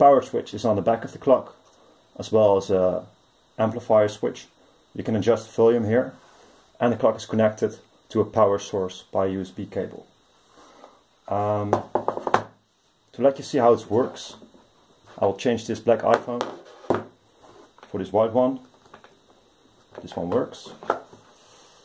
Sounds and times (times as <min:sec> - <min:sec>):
Speech: 0:00.0 - 0:01.6, 0:02.2 - 0:06.2, 0:06.8 - 0:10.1, 0:11.3 - 0:11.9, 0:13.1 - 0:14.4, 0:15.1 - 0:16.6, 0:17.9 - 0:18.7, 0:20.0 - 0:20.8.